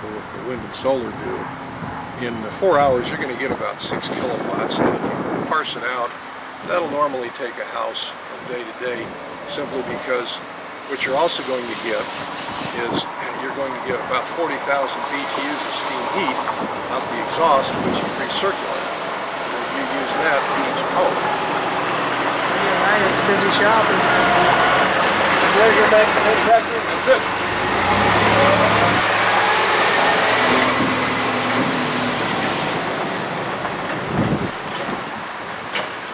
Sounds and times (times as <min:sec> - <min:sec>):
Male speech, man speaking: 0:00.0 - 0:01.5, 0:02.2 - 0:06.1, 0:06.7 - 0:12.1, 0:12.8 - 0:18.8, 0:19.5 - 0:21.3, 0:25.4 - 0:27.2
Vehicle: 0:00.0 - 0:36.1.